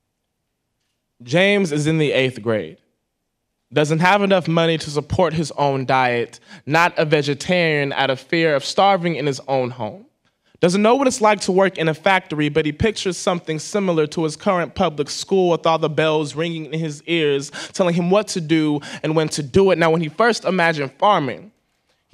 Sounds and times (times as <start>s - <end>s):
Speech: 1.2s - 2.8s, 3.7s - 21.6s.